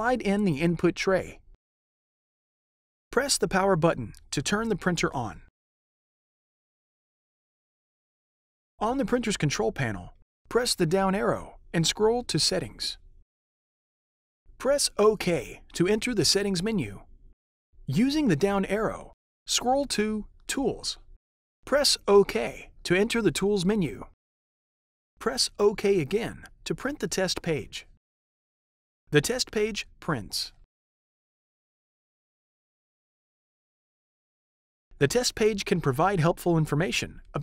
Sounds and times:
Speech synthesizer: 0.0 - 1.4, 3.2 - 5.5, 8.8 - 13.0, 14.6 - 17.0, 17.9 - 21.0, 21.7 - 24.1, 25.2 - 27.9, 29.2 - 30.6, 35.0 - 37.4.

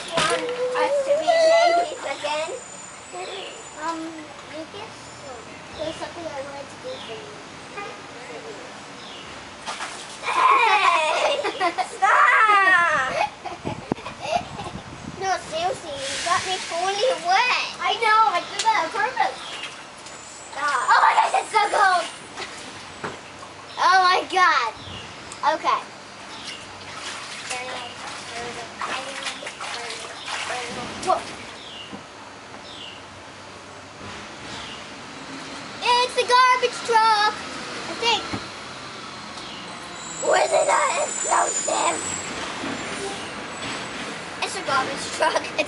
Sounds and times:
Speech: 15.2 - 19.4, 27.5 - 31.3, 35.8 - 37.4, 44.4 - 45.6.

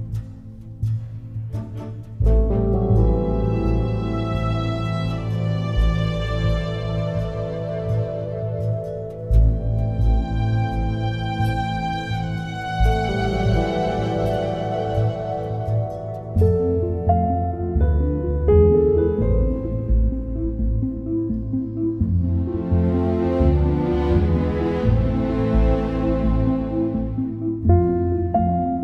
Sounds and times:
New-age music: 0.0 - 28.8.

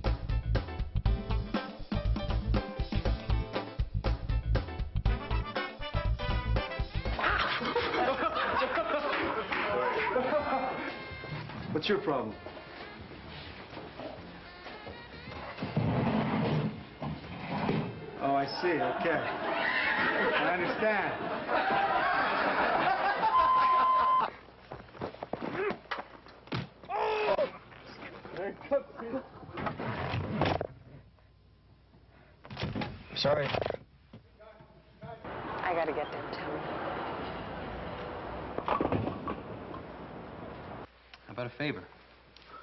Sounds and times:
Music: 0.0 - 7.9, 8.5 - 17.5.

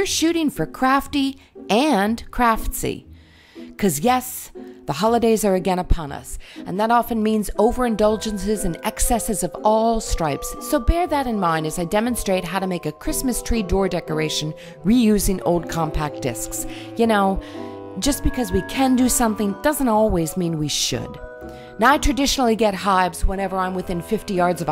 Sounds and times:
Speech: 0.0 - 3.0, 3.8 - 17.4, 18.0 - 21.2, 21.8 - 24.7
Music: 0.0 - 24.7.

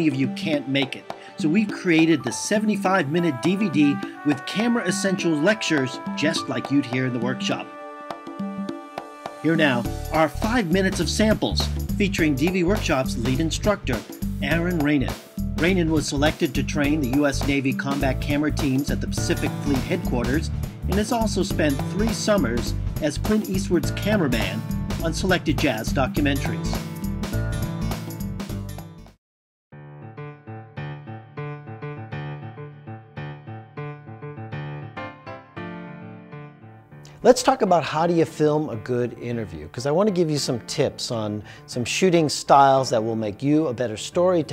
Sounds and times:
Speech: 0.0 - 7.7, 9.5 - 26.8, 37.2 - 44.5
Music: 0.0 - 44.5.

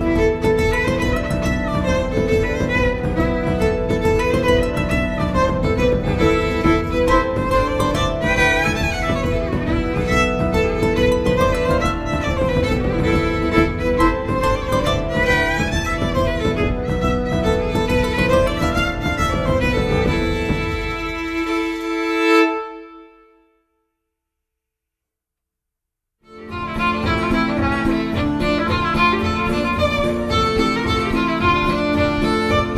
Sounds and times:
Violin, fiddle: 0.0 - 23.3, 26.3 - 32.7.

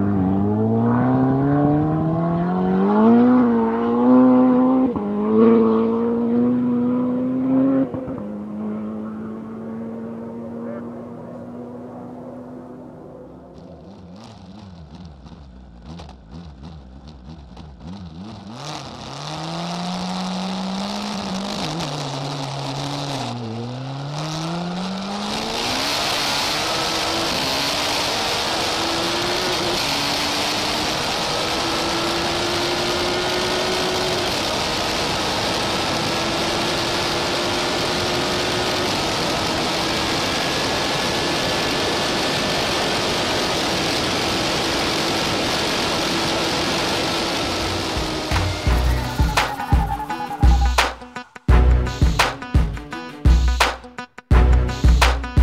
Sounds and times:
Vehicle: 0.0 - 52.7
Music: 48.3 - 55.4.

